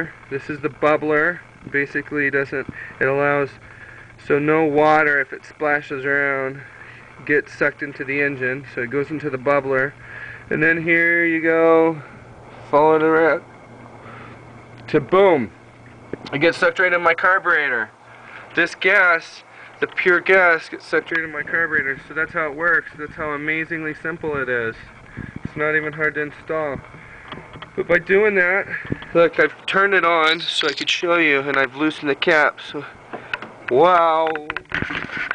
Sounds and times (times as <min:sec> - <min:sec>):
Speech: 0:00.0 - 0:03.6, 0:04.2 - 0:12.1, 0:12.7 - 0:13.4, 0:14.9 - 0:15.5, 0:16.3 - 0:17.9, 0:18.6 - 0:24.9, 0:25.5 - 0:26.8, 0:27.8 - 0:33.0, 0:33.7 - 0:34.7.